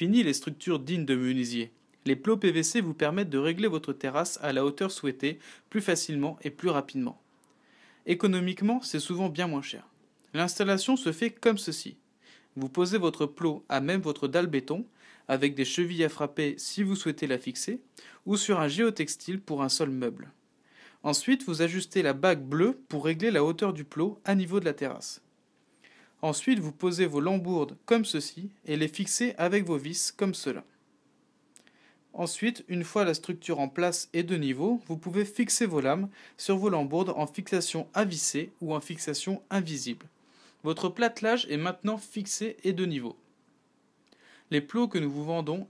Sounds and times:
Speech: 0:00.0 - 0:07.2, 0:08.0 - 0:12.0, 0:12.6 - 0:20.4, 0:21.0 - 0:25.3, 0:26.2 - 0:30.8, 0:32.1 - 0:43.2, 0:44.5 - 0:45.6.

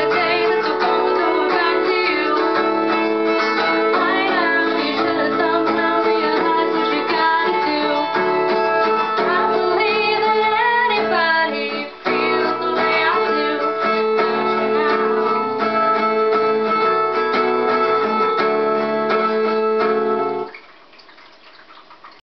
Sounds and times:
Strum: 0:00.0 - 0:20.5.

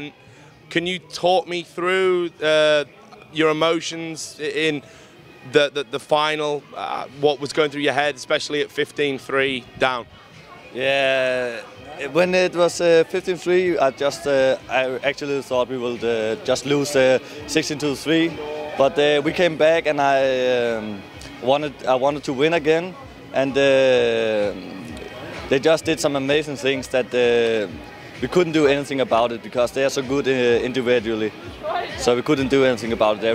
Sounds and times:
Music: 0:00.0 - 0:33.3.

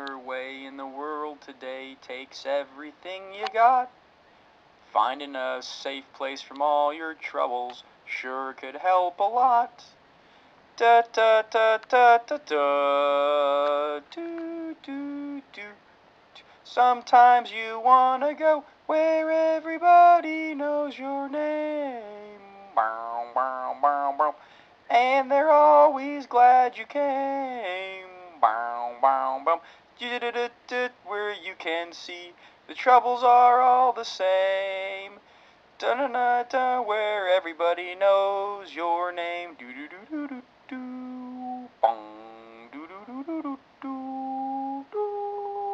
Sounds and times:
Male singing: 0:00.0 - 0:03.9, 0:05.0 - 0:09.9, 0:10.8 - 0:15.8, 0:16.7 - 0:35.2, 0:35.8 - 0:45.7.

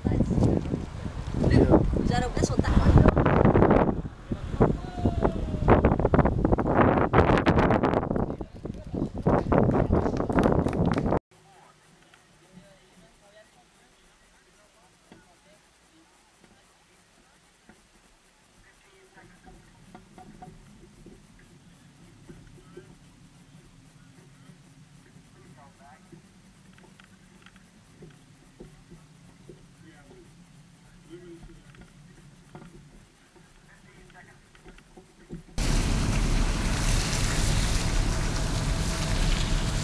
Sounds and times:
Wind noise (microphone): 0:00.0 - 0:11.2.

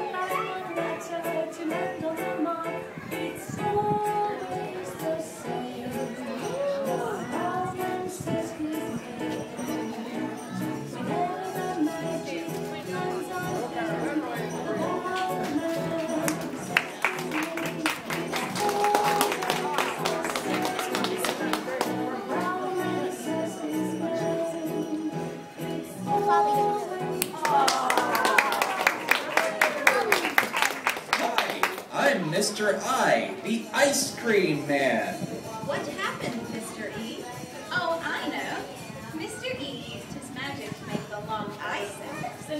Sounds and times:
Music: 0:00.0 - 0:29.5, 0:32.5 - 0:42.6
Male speech, man speaking: 0:31.2 - 0:35.4.

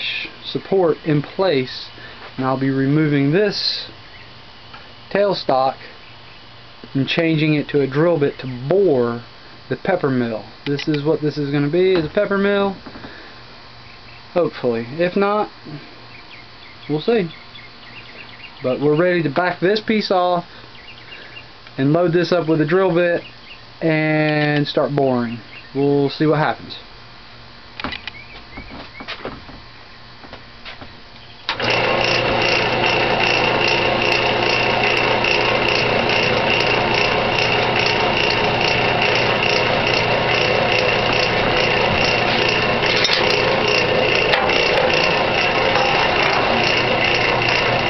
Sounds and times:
Speech: 0:00.0 - 0:04.0, 0:05.1 - 0:05.9, 0:06.9 - 0:12.8, 0:14.4 - 0:15.8, 0:16.9 - 0:17.4, 0:18.6 - 0:20.5, 0:21.8 - 0:26.9.

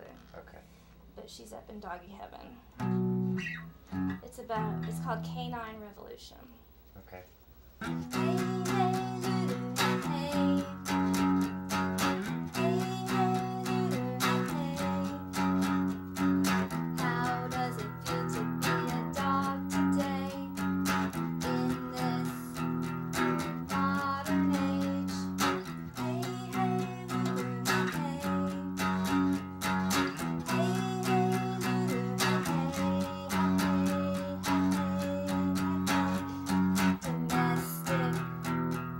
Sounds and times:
Speech: 0:00.0 - 0:02.6, 0:04.2 - 0:07.3
Music: 0:02.8 - 0:05.2, 0:07.8 - 0:38.9.

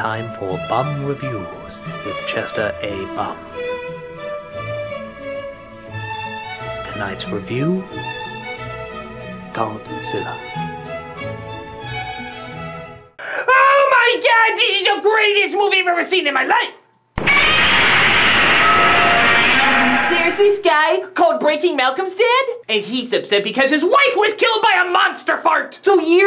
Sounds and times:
Speech: 0:00.0 - 0:03.4, 0:06.8 - 0:08.0, 0:09.6 - 0:10.4, 0:13.5 - 0:16.8, 0:20.5 - 0:26.2
Music: 0:00.0 - 0:13.2.

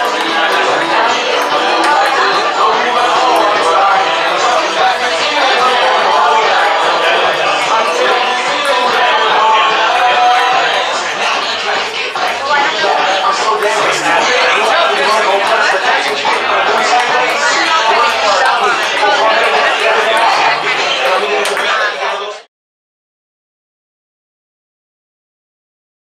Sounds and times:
Speech: 0:00.0 - 0:22.5.

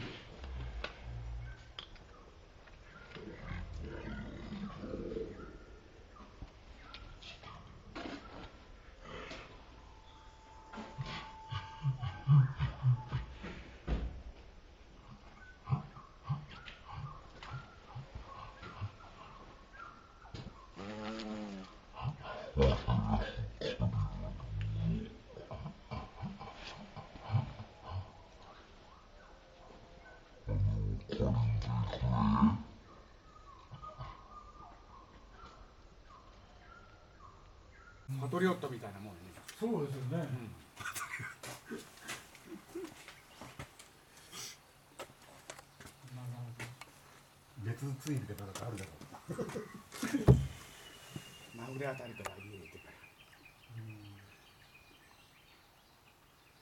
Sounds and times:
Bee, wasp, etc.: 0:20.8 - 0:21.8.

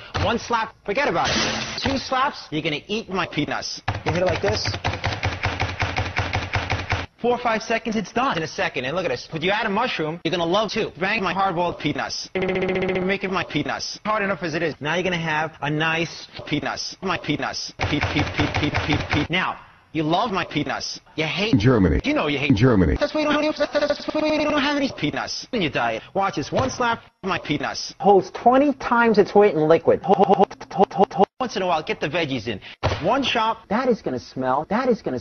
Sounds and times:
Speech: 0:00.2 - 0:04.7, 0:07.2 - 0:12.3, 0:13.1 - 0:17.8, 0:19.3 - 0:35.2.

